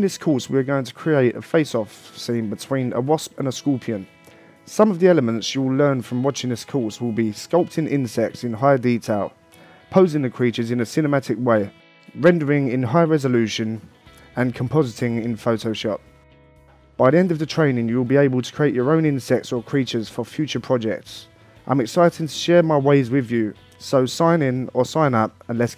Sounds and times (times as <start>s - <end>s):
Speech: 0.0s - 4.1s, 4.7s - 16.0s, 17.0s - 25.7s
Music: 0.0s - 25.7s.